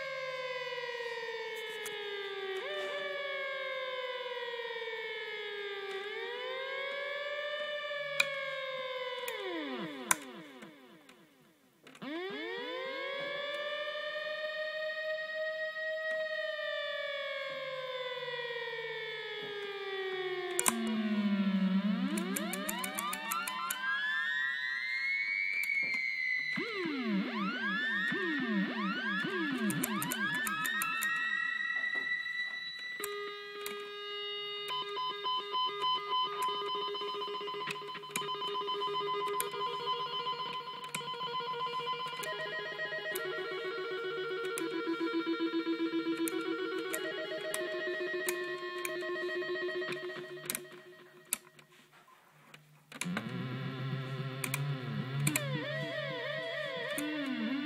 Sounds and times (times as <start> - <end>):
Siren: 0.0 - 57.6.